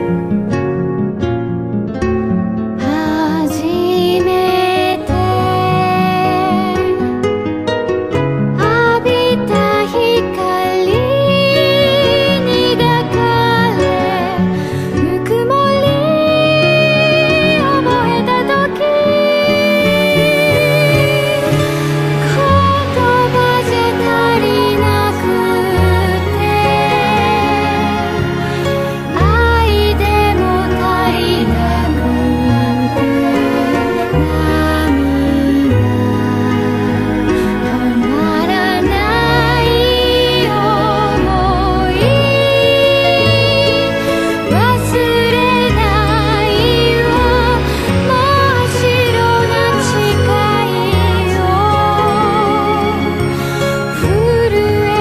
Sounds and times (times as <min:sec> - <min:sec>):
Music: 0:00.0 - 0:55.0.